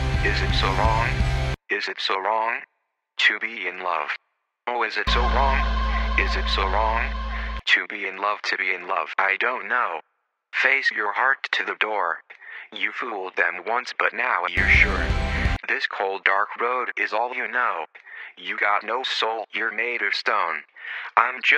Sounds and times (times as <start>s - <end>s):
Music: 0.0s - 1.6s, 5.1s - 7.7s, 14.6s - 15.6s
Speech: 0.0s - 2.6s, 3.2s - 10.0s, 10.6s - 21.5s.